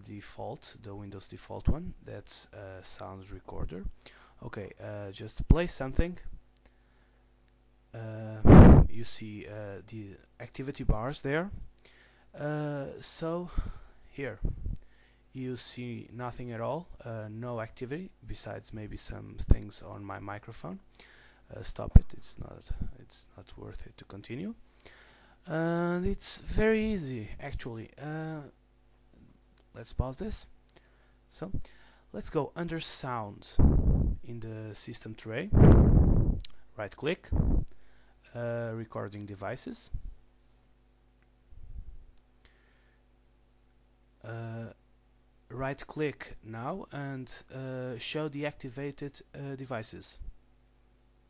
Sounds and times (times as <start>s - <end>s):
Speech: 0.0s - 6.4s, 7.9s - 11.6s, 12.4s - 14.5s, 15.3s - 20.9s, 21.5s - 24.6s, 25.4s - 28.6s, 29.7s - 30.6s, 31.3s - 33.6s, 34.2s - 35.6s, 36.8s - 37.3s, 38.3s - 40.0s, 44.2s - 44.8s, 45.5s - 50.3s.